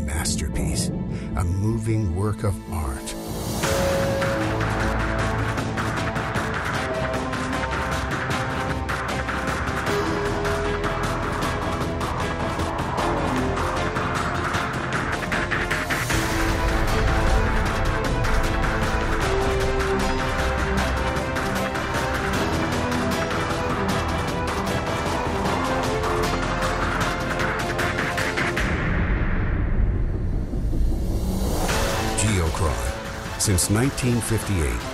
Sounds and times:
Music: 0.0 - 34.9.

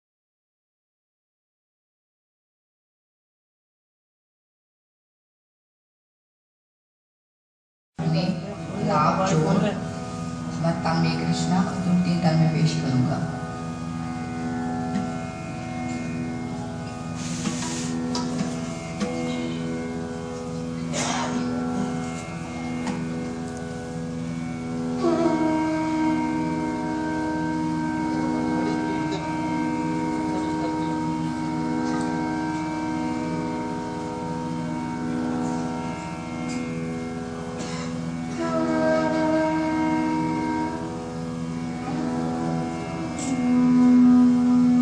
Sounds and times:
Speech: 8.0 - 9.8, 10.5 - 13.4, 20.8 - 21.5, 28.6 - 29.4, 30.1 - 31.2
Music: 8.0 - 44.8.

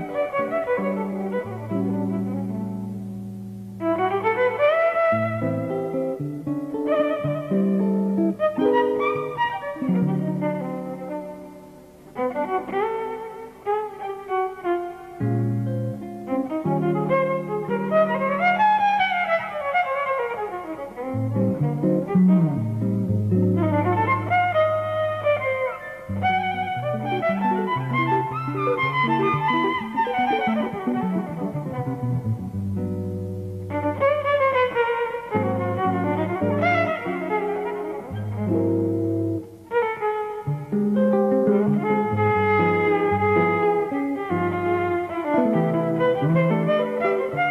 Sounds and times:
Violin, fiddle: 0.0 - 32.6, 33.6 - 47.5
Jazz: 0.0 - 47.5.

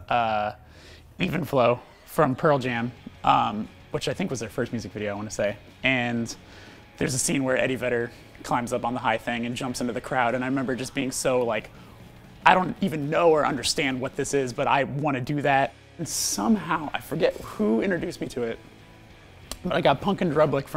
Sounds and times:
Speech: 0.0 - 0.6, 1.2 - 6.4, 7.0 - 11.7, 12.4 - 18.6, 19.6 - 20.7
Music: 0.0 - 20.7.

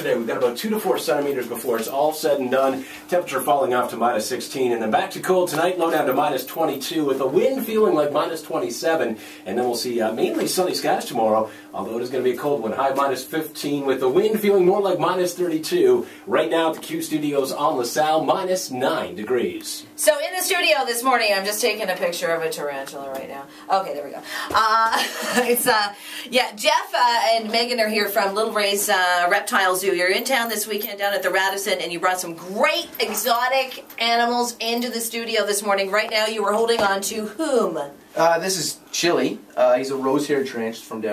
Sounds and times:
Inside, small room: 0.0 - 41.1.

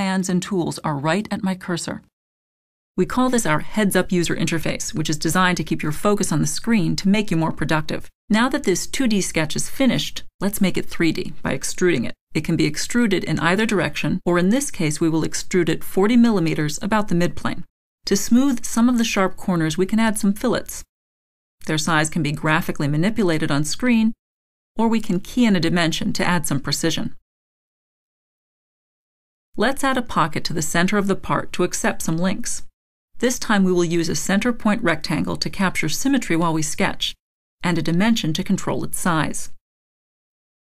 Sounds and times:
Speech: 0.0 - 2.1, 3.0 - 20.9, 21.6 - 24.2, 24.8 - 27.2, 29.6 - 39.6.

